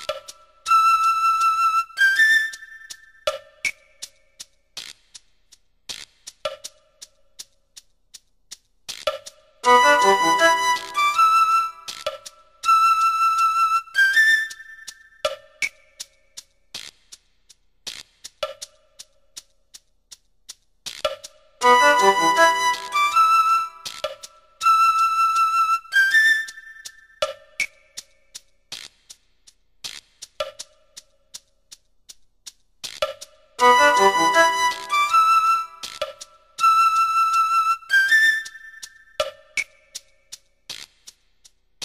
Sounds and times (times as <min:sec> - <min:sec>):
Soundtrack music: 0:09.7 - 0:11.2, 0:21.6 - 0:23.2, 0:33.6 - 0:35.6.